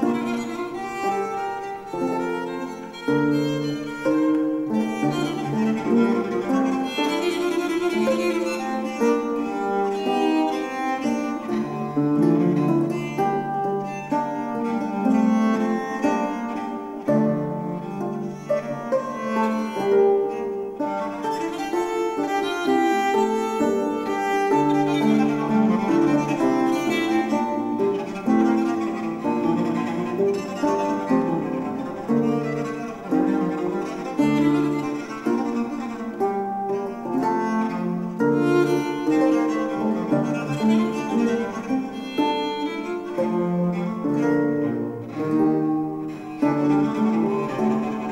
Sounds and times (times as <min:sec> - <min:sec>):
Bowed string instrument: 0:00.0 - 0:48.1
Plucked string instrument: 0:00.0 - 0:48.1.